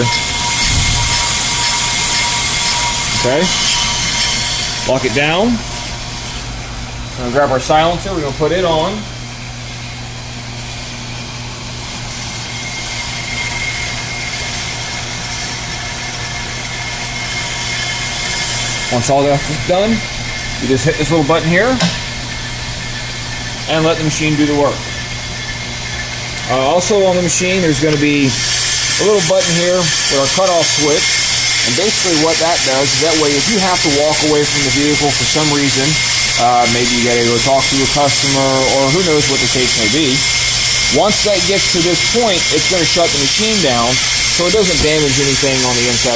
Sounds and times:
Speech: 3.1 - 3.6, 4.8 - 5.6, 7.2 - 9.1, 18.9 - 21.9, 23.7 - 24.9, 26.4 - 28.4, 29.0 - 31.0, 31.6 - 40.2, 40.9 - 46.1.

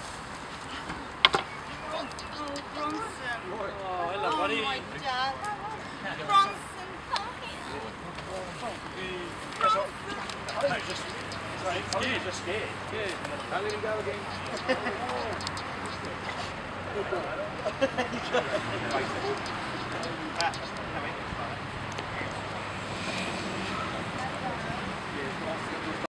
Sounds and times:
Speech: 1.8 - 21.6.

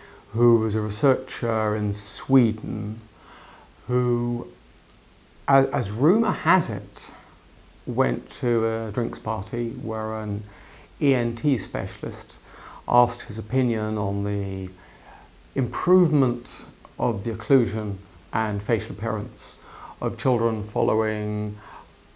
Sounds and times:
Speech: 0.0 - 3.1, 3.9 - 4.6, 5.5 - 7.3, 7.9 - 14.8, 15.6 - 21.6.

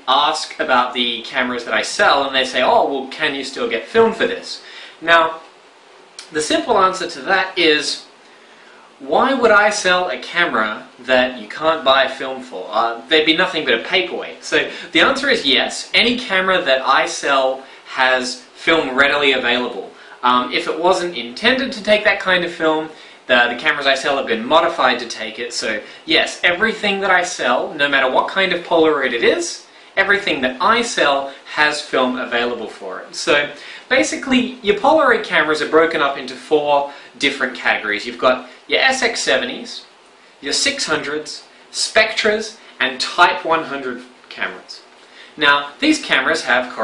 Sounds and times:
Speech: 0.0 - 5.5, 6.2 - 8.1, 9.0 - 46.8.

